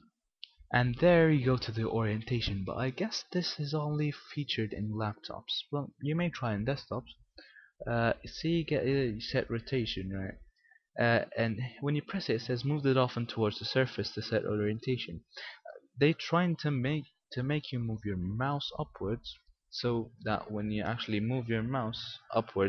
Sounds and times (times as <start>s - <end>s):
Speech: 0.4s - 7.2s, 7.8s - 10.4s, 11.0s - 22.6s.